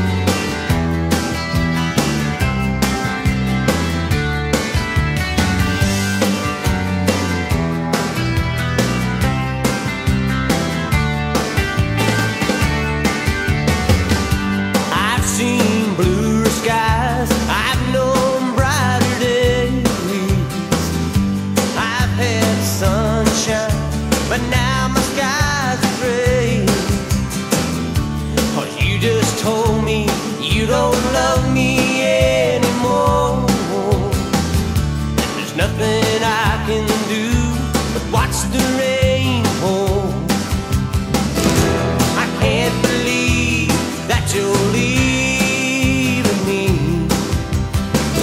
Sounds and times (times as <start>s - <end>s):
Music: 0.0s - 48.2s.